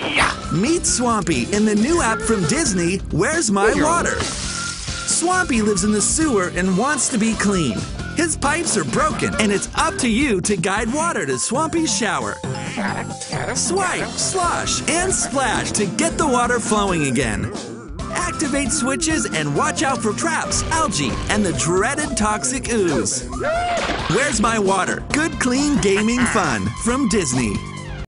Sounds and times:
Music: 0.0s - 28.0s
Speech: 0.5s - 4.3s, 5.1s - 12.4s, 13.6s - 23.3s, 24.1s - 27.6s.

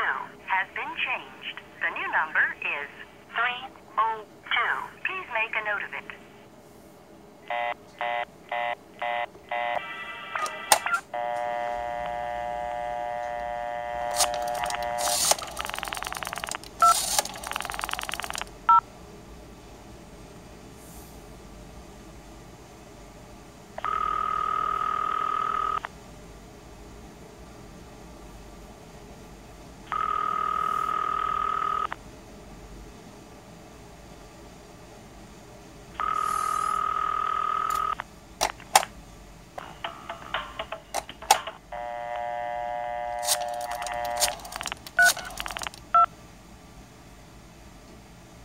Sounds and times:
Scrape: 20.8s - 21.3s.

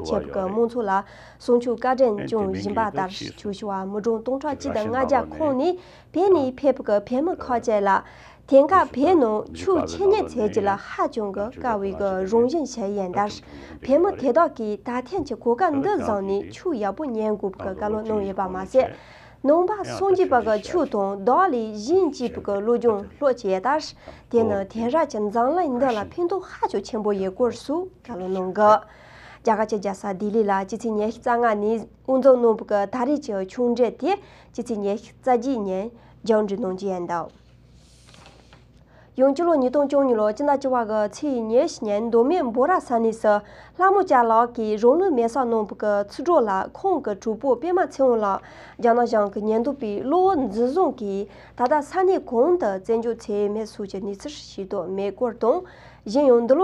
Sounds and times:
Speech: 0.0s - 28.9s, 29.5s - 37.3s, 39.2s - 56.6s.

